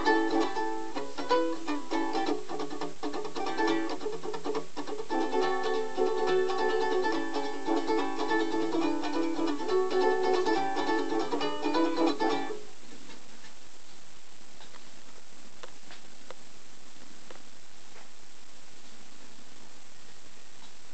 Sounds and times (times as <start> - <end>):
Ukulele: 0.0 - 13.3.